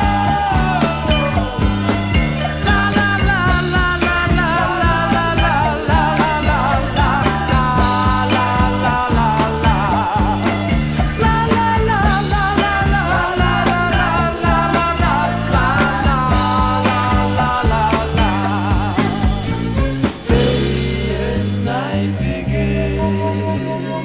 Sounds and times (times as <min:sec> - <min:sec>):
Psychedelic rock: 0:00.0 - 0:24.0.